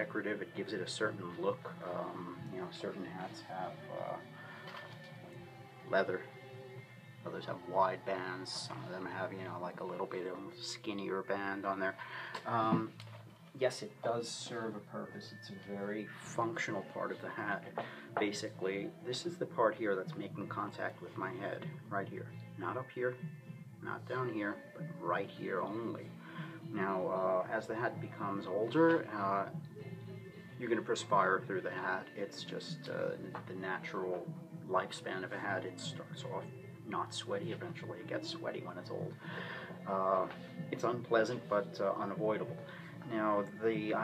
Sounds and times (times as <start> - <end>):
Speech: 0.0 - 4.2, 7.3 - 12.9, 13.6 - 23.2, 23.8 - 26.1, 26.7 - 29.5, 30.6 - 39.1, 39.9 - 44.0
Music: 0.0 - 44.0.